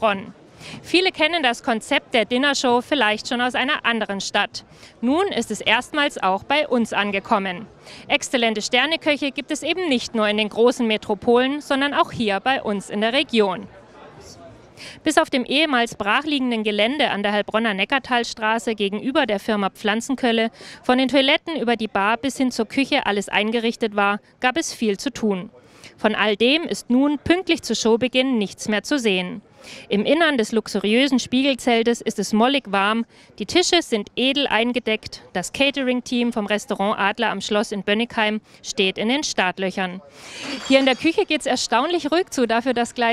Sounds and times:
Speech: 0.0s - 43.1s.

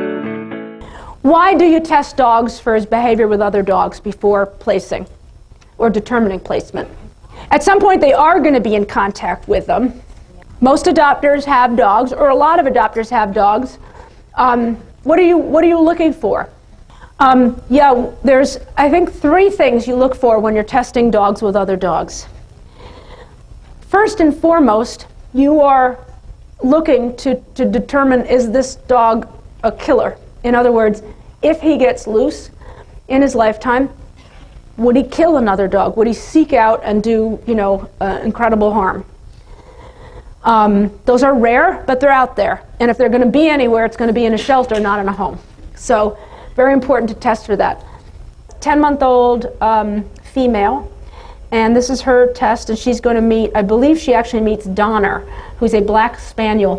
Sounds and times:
Speech: 1.2s - 5.2s, 5.8s - 13.8s, 14.4s - 16.6s, 17.2s - 22.4s, 23.9s - 34.0s, 34.8s - 39.1s, 40.4s - 47.9s, 48.5s - 56.7s.

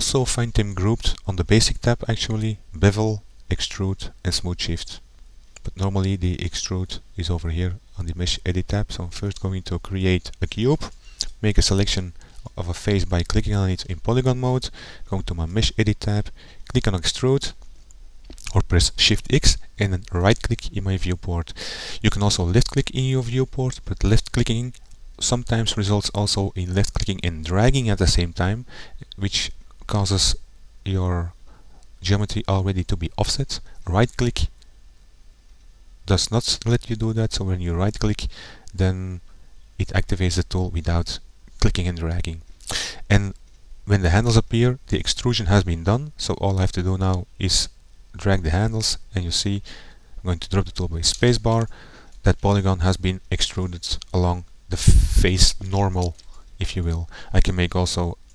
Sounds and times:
Speech: 0.0s - 5.0s, 5.6s - 17.6s, 18.4s - 31.4s, 32.0s - 34.5s, 36.0s - 39.2s, 39.8s - 58.2s.

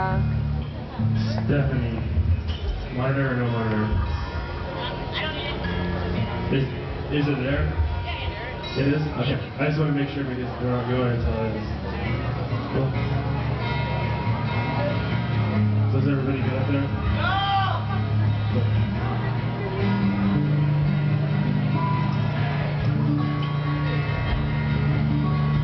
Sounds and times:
Music: 0.0s - 25.6s.

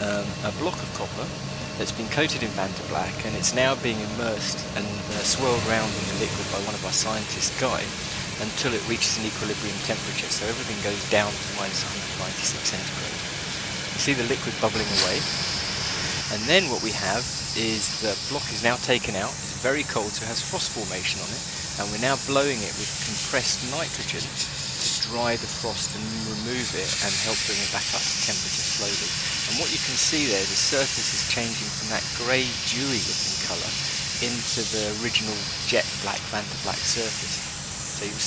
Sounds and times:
Speech: 0.0s - 13.2s, 14.0s - 15.3s, 16.3s - 37.4s, 38.0s - 38.2s.

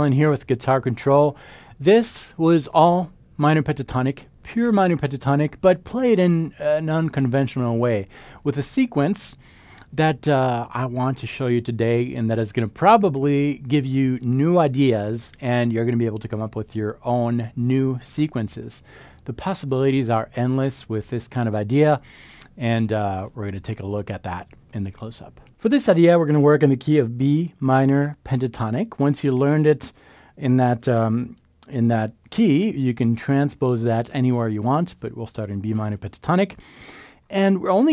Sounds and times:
Speech: 0.0s - 22.0s, 22.6s - 36.6s, 37.3s - 37.9s.

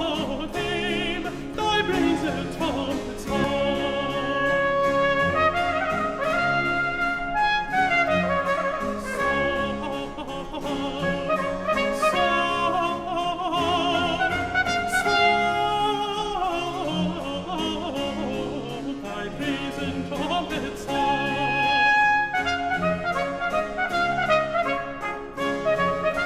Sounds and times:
Music: 0.0s - 26.2s.

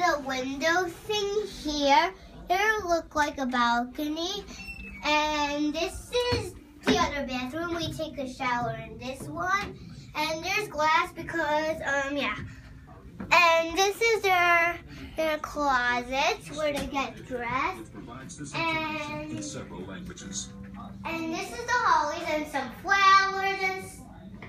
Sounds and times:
Child speech, kid speaking: 0.0s - 17.9s, 18.5s - 19.6s, 21.0s - 24.3s
Inside, small room: 0.0s - 24.4s.

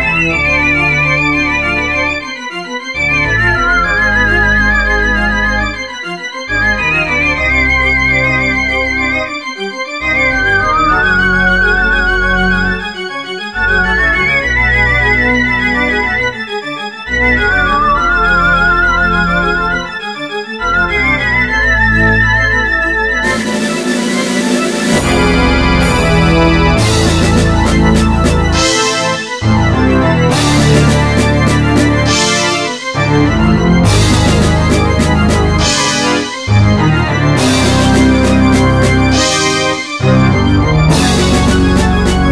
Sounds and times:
Rhythm and blues: 0.0s - 42.3s.

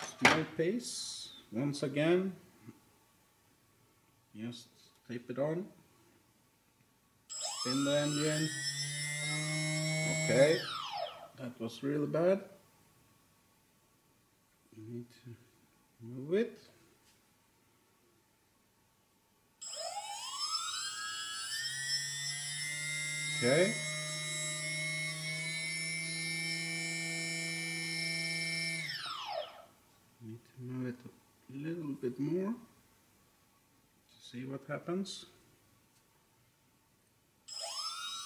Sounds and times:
Inside, small room: 0.0s - 38.2s
Speech: 4.4s - 5.8s, 11.4s - 12.6s, 14.8s - 15.4s, 16.0s - 16.8s, 30.2s - 32.7s, 34.2s - 35.4s.

